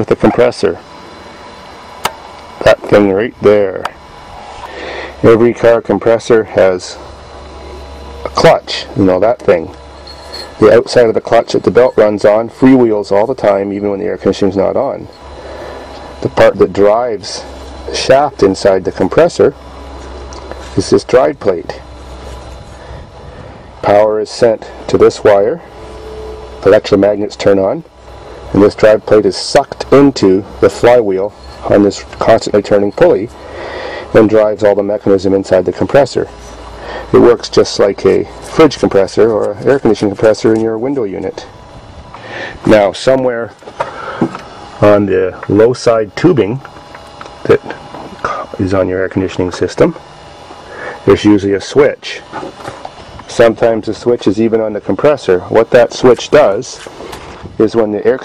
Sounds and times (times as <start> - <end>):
Speech: 0.0 - 0.8, 2.6 - 4.0, 5.2 - 7.0, 8.2 - 9.8, 10.6 - 15.1, 16.2 - 19.6, 20.7 - 21.9, 23.8 - 25.6, 26.6 - 27.9, 28.5 - 33.3, 34.1 - 36.3, 37.1 - 41.5, 42.6 - 43.6, 44.8 - 46.6, 47.4 - 50.0, 51.0 - 52.4, 53.3 - 56.9, 57.6 - 58.2.